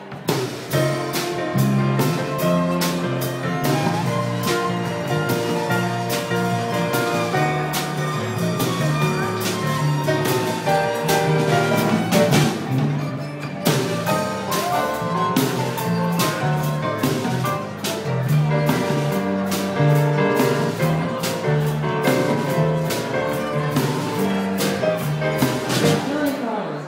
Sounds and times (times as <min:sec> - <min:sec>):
Violin, fiddle: 0:01.2 - 0:26.6.